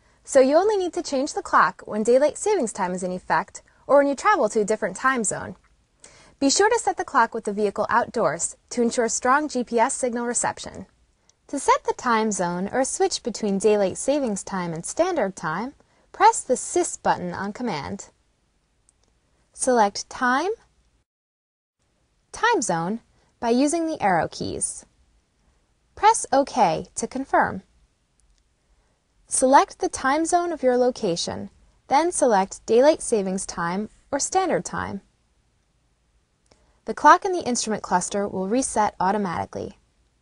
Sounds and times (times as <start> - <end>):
Speech: 0.3 - 5.6, 6.4 - 10.9, 11.5 - 18.1, 19.6 - 20.7, 22.3 - 24.9, 26.0 - 27.7, 29.3 - 35.1, 36.9 - 39.8.